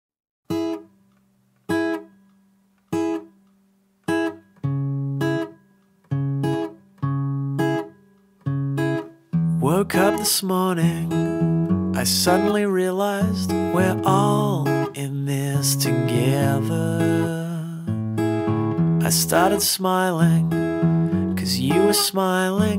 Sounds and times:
Acoustic guitar: 0:00.5 - 0:22.7.

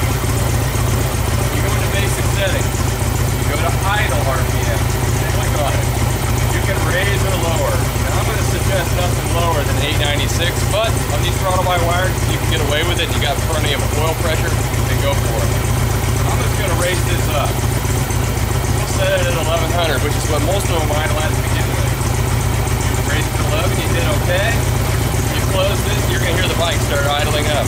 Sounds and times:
Speech: 0:01.2 - 0:02.8, 0:03.4 - 0:17.6, 0:18.7 - 0:22.2, 0:22.9 - 0:27.6.

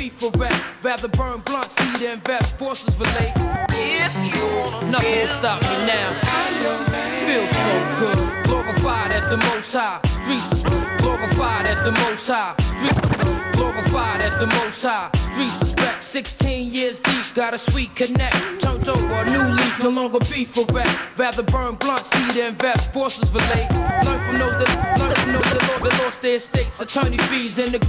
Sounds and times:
Music: 0:00.0 - 0:27.8.

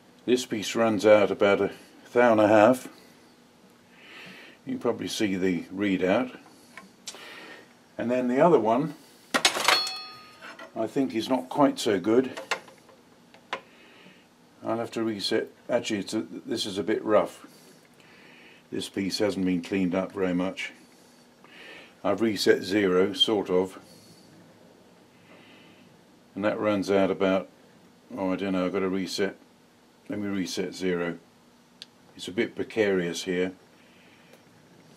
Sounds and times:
Inside, small room: 0:00.0 - 0:34.9
Speech: 0:00.3 - 0:03.0, 0:04.7 - 0:06.4, 0:08.0 - 0:09.0, 0:10.8 - 0:12.4, 0:14.6 - 0:17.5, 0:18.7 - 0:20.8, 0:22.0 - 0:23.9, 0:26.4 - 0:27.5, 0:28.1 - 0:29.4, 0:30.1 - 0:31.2, 0:32.2 - 0:33.6
Tools: 0:09.4 - 0:10.8.

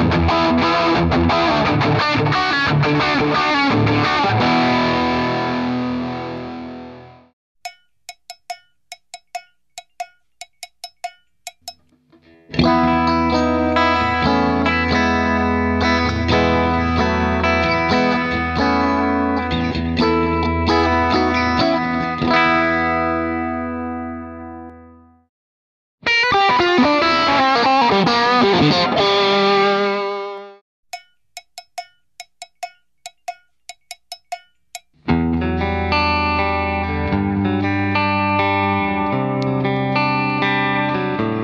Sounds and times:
Bass guitar: 0:00.0 - 0:07.3, 0:12.2 - 0:25.1, 0:35.0 - 0:41.4
Electric guitar: 0:00.0 - 0:07.3, 0:12.2 - 0:24.8, 0:26.0 - 0:30.6, 0:35.0 - 0:41.4.

